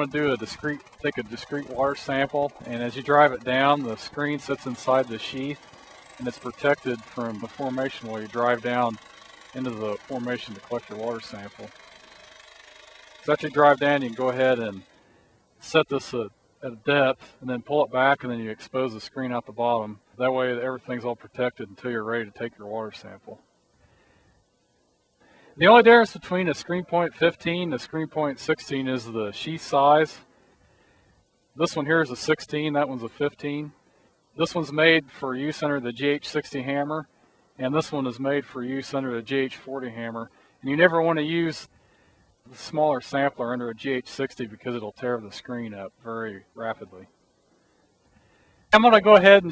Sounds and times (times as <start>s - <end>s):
Speech: 0.0s - 5.6s, 6.2s - 9.0s, 9.6s - 11.7s, 13.3s - 14.8s, 15.6s - 23.4s, 25.6s - 30.2s, 31.6s - 33.7s, 34.4s - 41.7s, 42.5s - 47.1s, 48.7s - 49.5s.